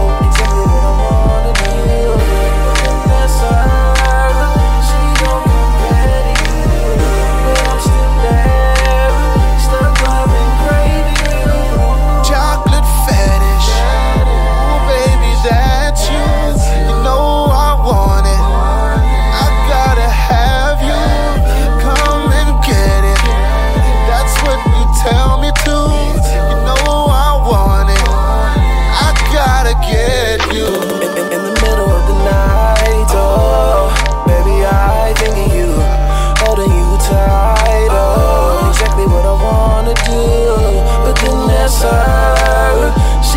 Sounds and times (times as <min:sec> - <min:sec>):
Hip hop music: 0:00.0 - 0:43.3
Rhythm and blues: 0:00.0 - 0:43.3.